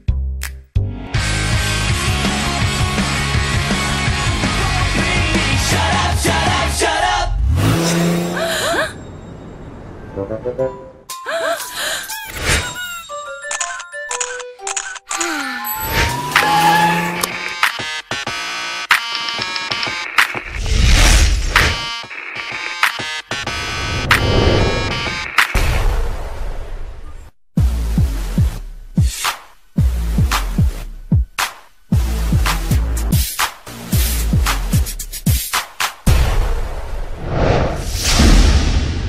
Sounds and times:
Music: 0:00.0 - 0:07.4, 0:10.2 - 0:15.8, 0:16.4 - 0:25.6, 0:27.6 - 0:36.5.

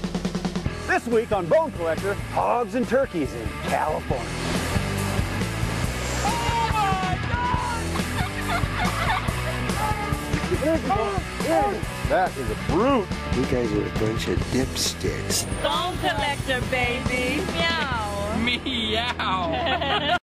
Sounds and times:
Music: 0:00.0 - 0:20.2.

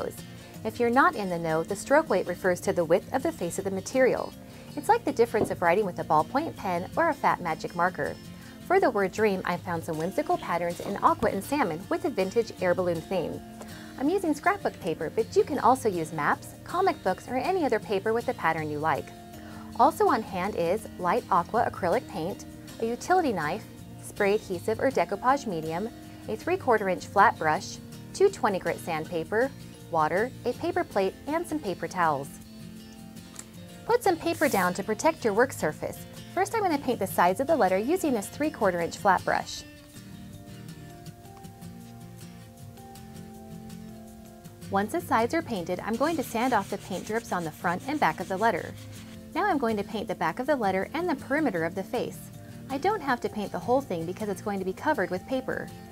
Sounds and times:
Speech: 0:00.0 - 0:13.4, 0:14.0 - 0:19.1, 0:19.8 - 0:32.4, 0:33.9 - 0:39.6, 0:44.7 - 0:48.7, 0:49.4 - 0:55.7
Music: 0:00.0 - 0:55.9.

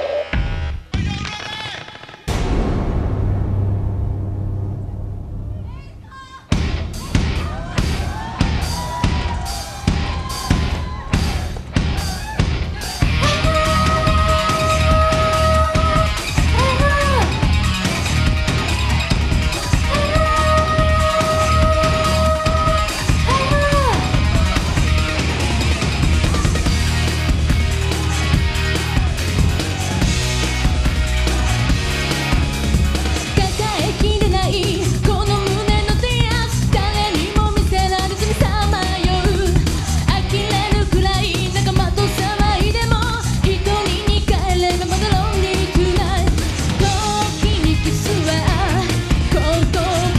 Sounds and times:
Music: 0:00.0 - 0:50.1.

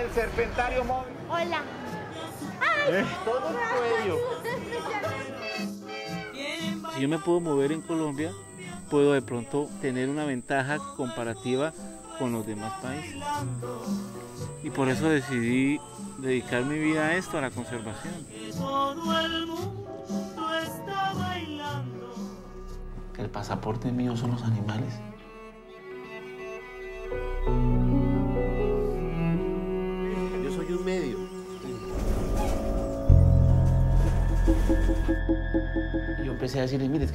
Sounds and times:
Music: 0:00.0 - 0:37.1.

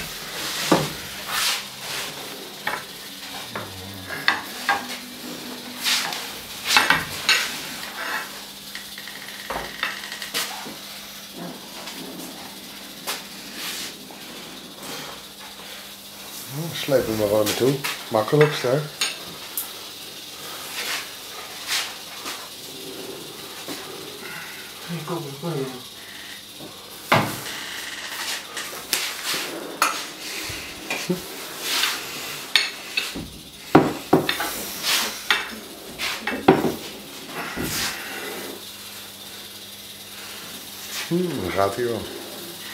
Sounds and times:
Hiss: 0:00.0 - 0:42.7.

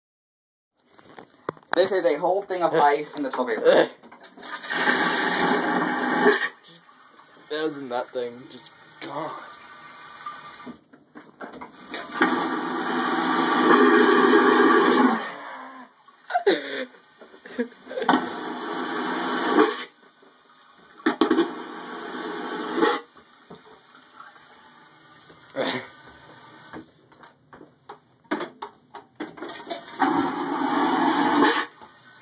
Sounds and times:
Speech: 0:01.8 - 0:04.0, 0:07.5 - 0:09.5
Toilet flush: 0:04.2 - 0:10.9, 0:11.6 - 0:15.3, 0:15.9 - 0:27.0, 0:29.3 - 0:32.2.

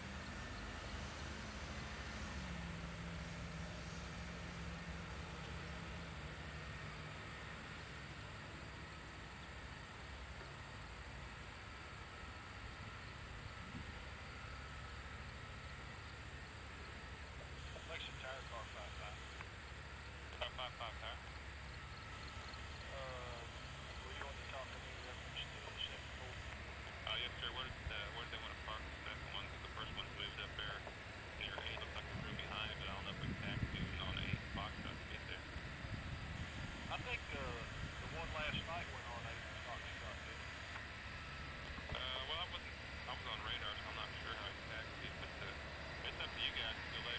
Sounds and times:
Aircraft: 0:00.0 - 0:47.1
Speech: 0:17.6 - 0:19.2, 0:20.3 - 0:21.2, 0:22.9 - 0:35.5, 0:36.9 - 0:40.5, 0:41.8 - 0:47.1.

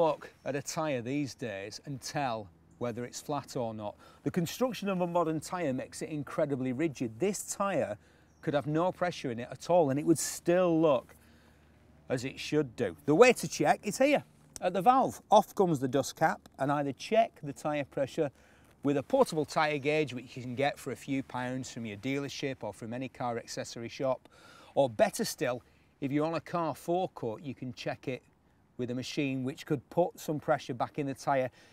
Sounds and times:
Speech: 0:00.0 - 0:11.2, 0:12.1 - 0:31.6.

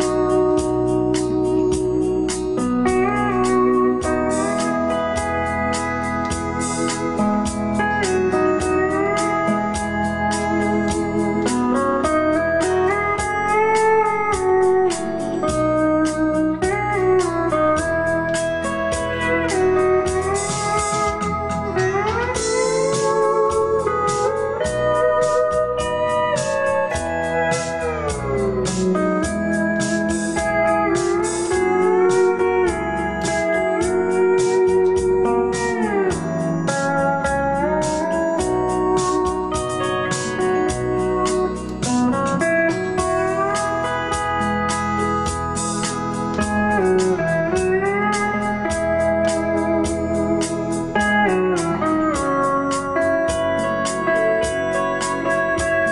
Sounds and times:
Steel guitar, slide guitar: 0:00.0 - 0:55.9.

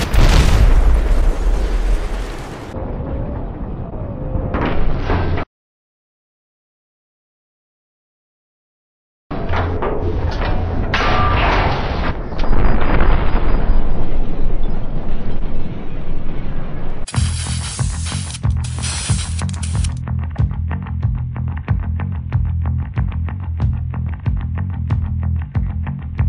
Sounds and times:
Music: 0:17.1 - 0:26.2.

